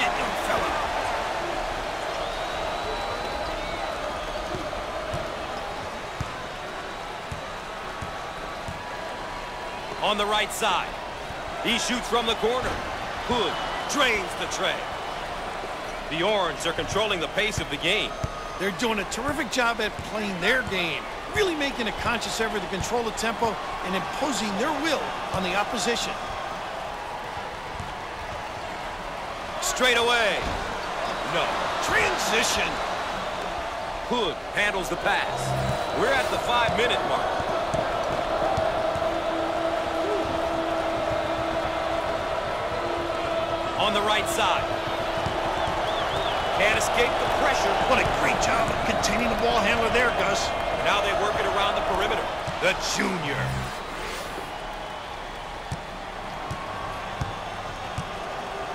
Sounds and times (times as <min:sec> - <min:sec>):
Speech: 0:00.0 - 0:00.8, 0:10.0 - 0:10.9, 0:11.6 - 0:14.9, 0:16.1 - 0:26.2, 0:29.6 - 0:30.6, 0:31.3 - 0:32.8, 0:34.1 - 0:37.4, 0:43.8 - 0:44.7, 0:46.6 - 0:53.7.